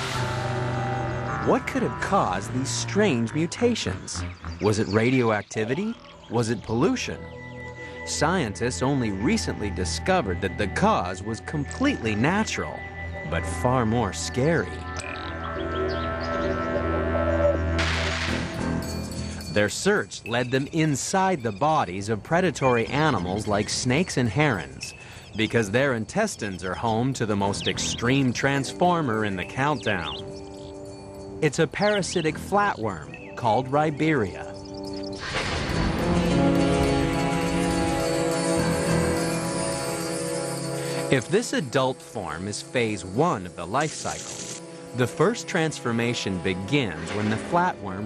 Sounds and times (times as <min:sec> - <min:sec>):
Music: 0:00.0 - 0:48.0
Speech: 0:01.4 - 0:07.2, 0:08.1 - 0:14.8, 0:19.5 - 0:30.2, 0:31.4 - 0:34.6, 0:41.1 - 0:44.2, 0:45.0 - 0:48.0.